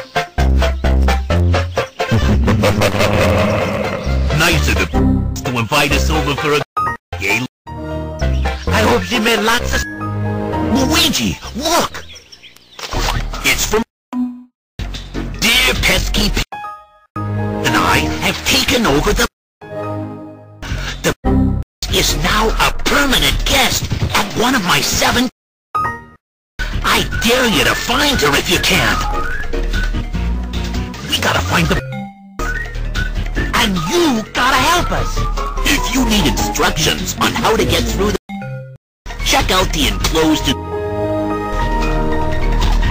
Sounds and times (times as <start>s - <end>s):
Music: 0.0s - 11.8s, 14.8s - 23.9s, 25.8s - 42.9s
Speech: 4.3s - 7.5s, 8.7s - 9.9s, 10.6s - 12.1s, 13.4s - 13.9s, 15.4s - 16.5s, 17.6s - 19.3s, 21.8s - 25.3s, 26.8s - 29.1s, 31.0s - 31.8s, 33.5s - 38.2s, 39.2s - 40.6s.